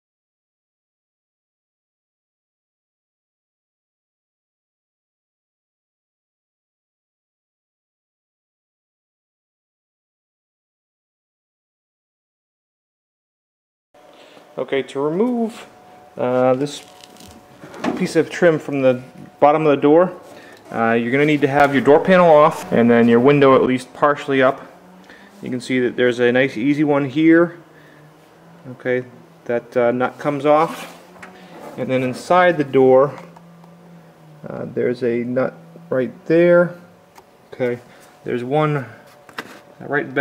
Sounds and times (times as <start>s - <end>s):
Vehicle: 14.0s - 40.2s
Speech: 14.6s - 16.9s, 17.9s - 24.7s, 25.4s - 27.6s, 28.6s - 30.9s, 31.8s - 33.3s, 34.4s - 36.9s, 37.5s - 39.0s, 39.8s - 40.2s.